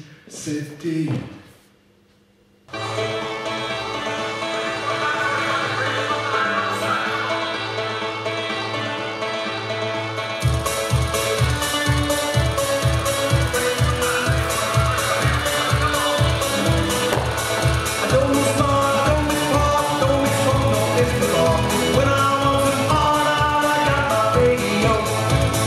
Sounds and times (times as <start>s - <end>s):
Speech: 0.0s - 1.4s
Music: 2.7s - 25.6s.